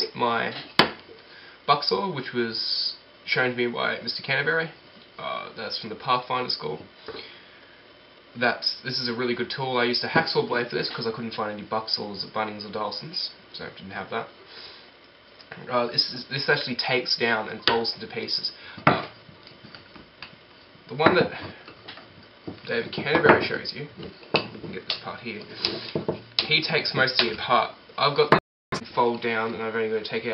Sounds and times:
Speech: 0.0s - 0.7s, 1.7s - 6.9s, 8.4s - 14.3s, 15.5s - 19.1s, 20.9s - 21.6s, 22.6s - 24.0s, 24.6s - 25.8s, 26.4s - 30.3s.

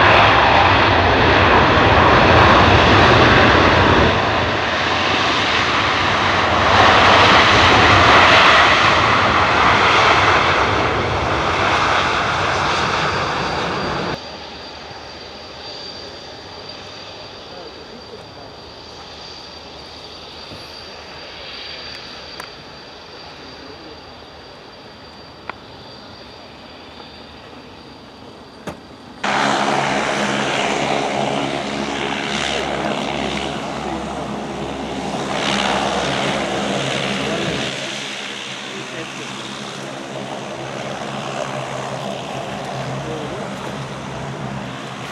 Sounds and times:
Fixed-wing aircraft, airplane: 0.0s - 45.1s
Propeller, airscrew: 0.0s - 45.1s.

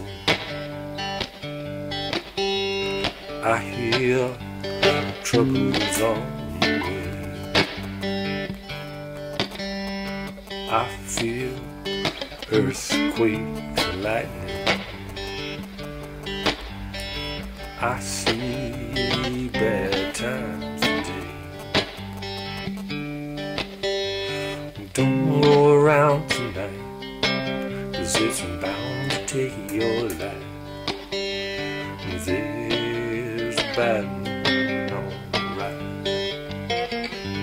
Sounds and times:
Acoustic guitar: 0.0s - 37.4s
Strum: 0.0s - 37.4s.

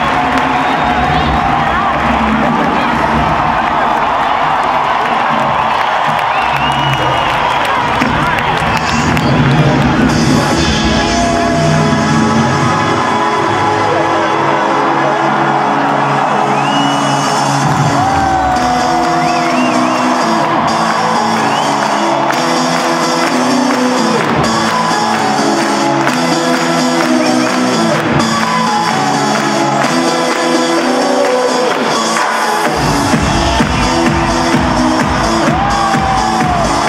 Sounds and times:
Music: 0.0s - 36.8s.

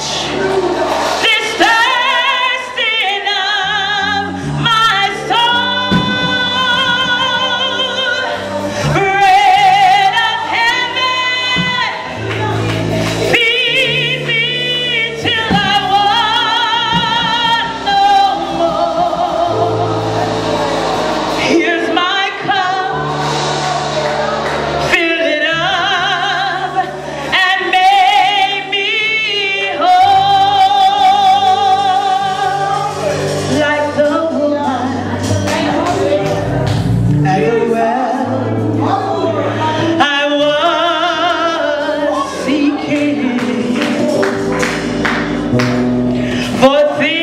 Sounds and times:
Music: 0.0s - 47.2s.

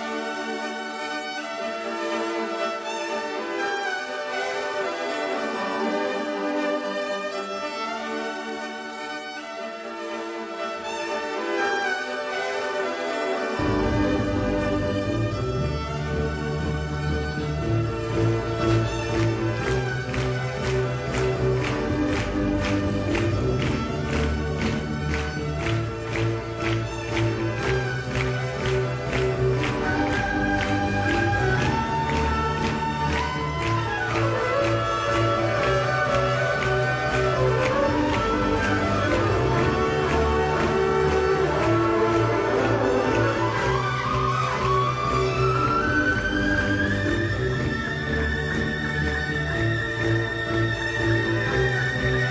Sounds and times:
Violin, fiddle: 0.0s - 52.3s.

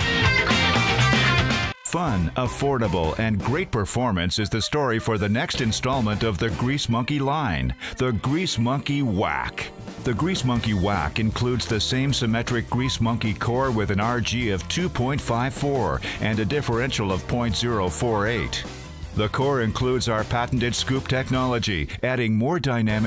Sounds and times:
Music: 0.0s - 23.0s
Speech: 1.8s - 23.0s.

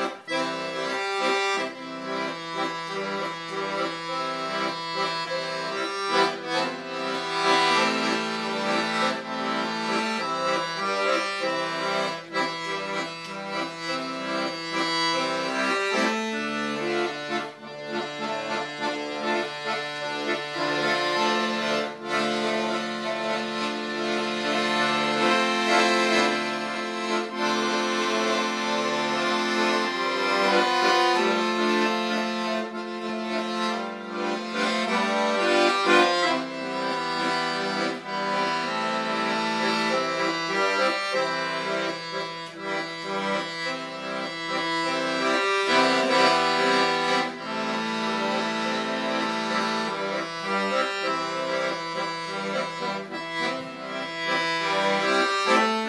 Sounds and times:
Accordion: 0.0s - 55.8s.

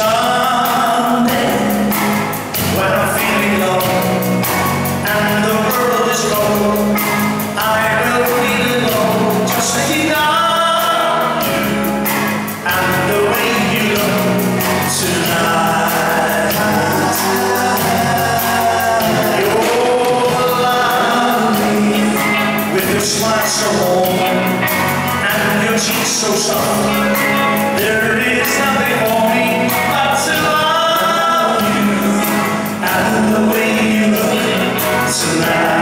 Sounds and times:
Male singing: 0.0s - 1.9s, 2.6s - 4.3s, 5.0s - 11.5s, 12.6s - 35.8s
Music: 0.0s - 35.8s.

